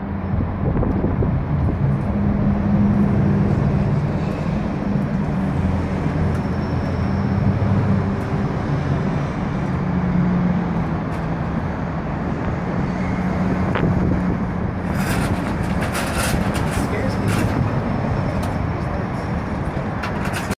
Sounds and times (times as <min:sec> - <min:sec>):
Vehicle: 0:00.0 - 0:20.5
Speech: 0:16.7 - 0:17.6.